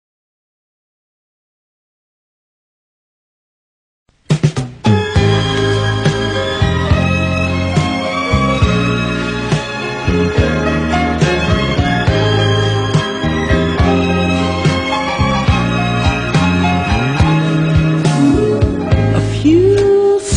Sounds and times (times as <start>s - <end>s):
Soul music: 4.5s - 20.3s.